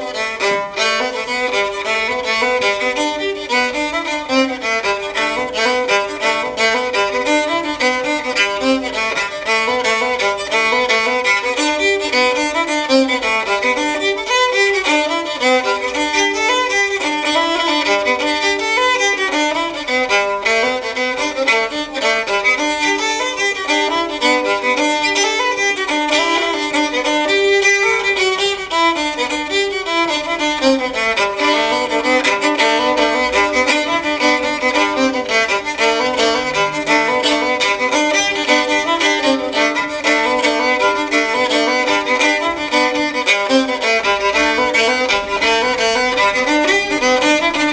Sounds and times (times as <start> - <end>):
Violin, fiddle: 0.0 - 47.7.